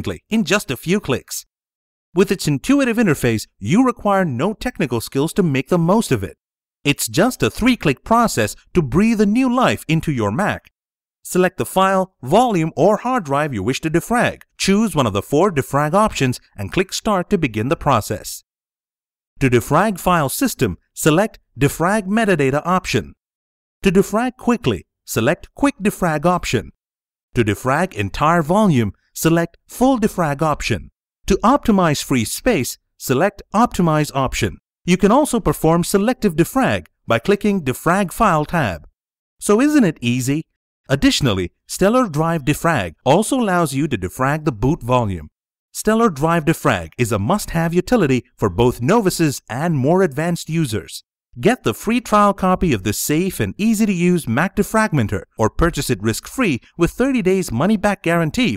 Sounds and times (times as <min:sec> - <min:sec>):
Speech: 0:00.0 - 0:01.5, 0:02.2 - 0:18.4, 0:19.4 - 0:23.2, 0:23.8 - 0:26.8, 0:27.4 - 0:58.5.